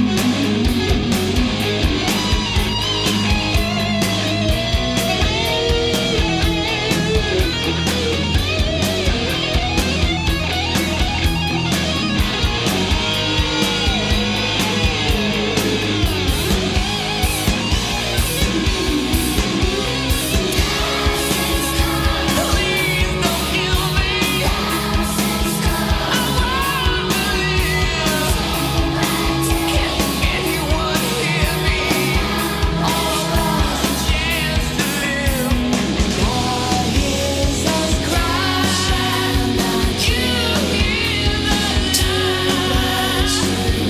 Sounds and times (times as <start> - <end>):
Punk rock: 0.0 - 43.8
Singing: 20.5 - 43.8.